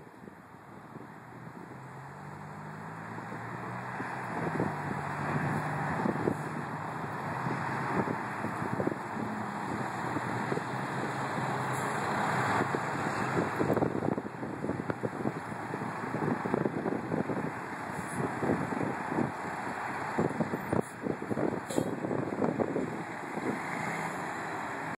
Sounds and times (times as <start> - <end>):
Vehicle: 0.0 - 24.9.